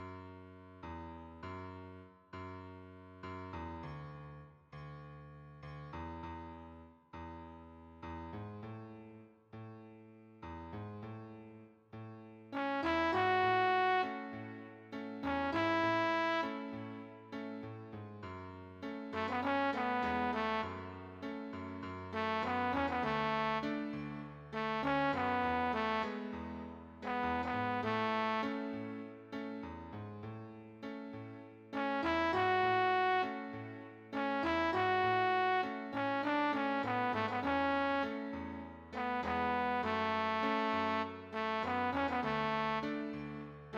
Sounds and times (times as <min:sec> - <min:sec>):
Happy music: 0:12.6 - 0:17.6, 0:19.1 - 0:29.6, 0:31.7 - 0:43.7
New-age music: 0:12.6 - 0:17.7, 0:18.9 - 0:29.6, 0:30.8 - 0:43.7
Tender music: 0:12.6 - 0:17.7, 0:18.8 - 0:29.7, 0:30.8 - 0:43.7
Background music: 0:12.6 - 0:43.7.